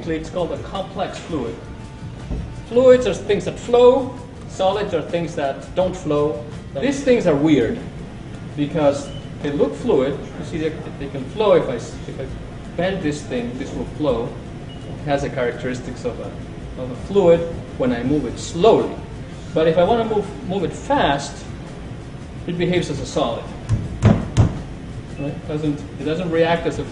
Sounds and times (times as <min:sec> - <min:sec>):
Speech: 0:00.0 - 0:01.6, 0:02.7 - 0:07.9, 0:08.6 - 0:14.4, 0:15.0 - 0:21.5, 0:22.5 - 0:23.5, 0:25.2 - 0:26.9.